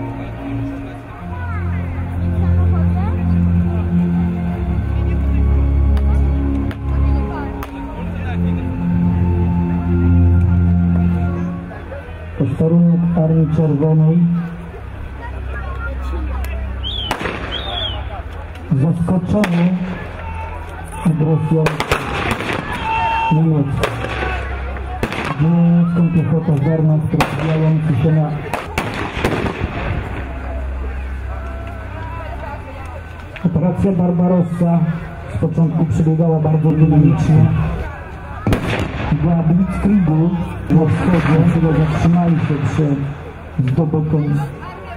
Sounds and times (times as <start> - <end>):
Music: 0.0 - 44.9.